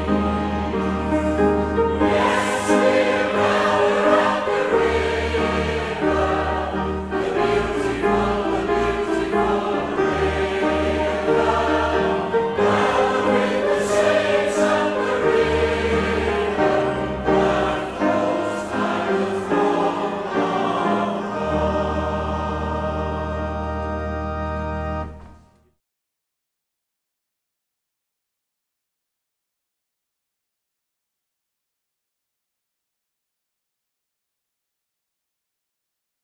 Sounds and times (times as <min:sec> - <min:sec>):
Organ: 0:00.0 - 0:25.6.